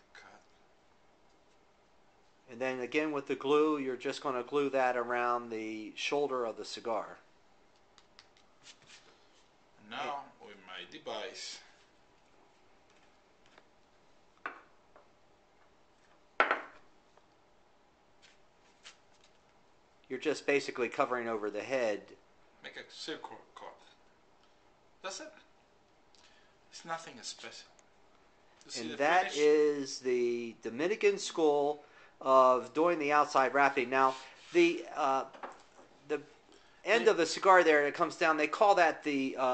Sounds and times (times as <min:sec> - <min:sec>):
Inside, small room: 0:00.0 - 0:39.5
Speech: 0:02.5 - 0:07.2, 0:09.8 - 0:11.7, 0:20.1 - 0:24.0, 0:25.1 - 0:25.4, 0:28.7 - 0:35.3, 0:36.9 - 0:39.5.